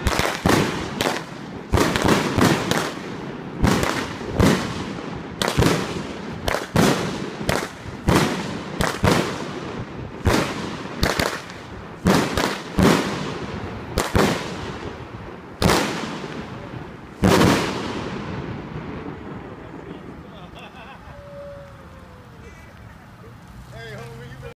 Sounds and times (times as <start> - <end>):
Speech: 23.7 - 24.5.